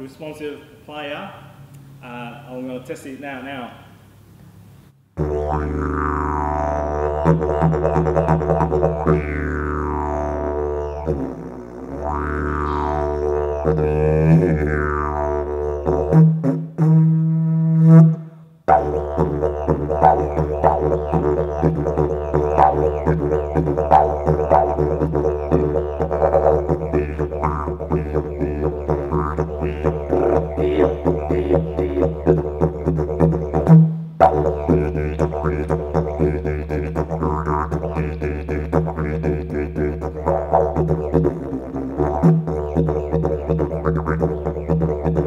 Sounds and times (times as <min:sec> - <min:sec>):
Didgeridoo: 0:05.2 - 0:45.2.